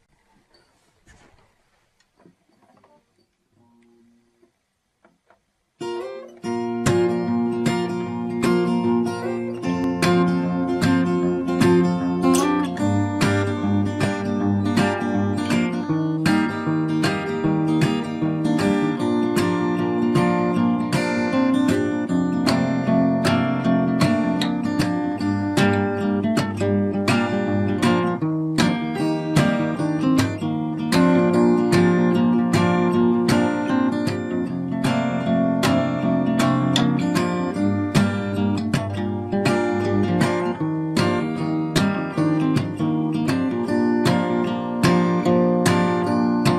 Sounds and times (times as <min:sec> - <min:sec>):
Strum: 0:00.0 - 0:46.5.